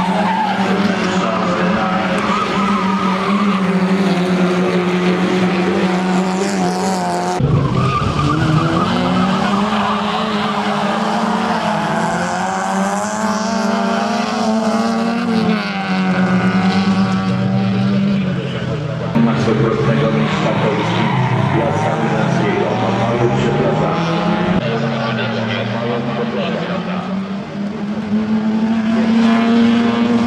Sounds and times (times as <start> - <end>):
Race car, auto racing: 0.0 - 30.2
Skidding: 0.0 - 30.2.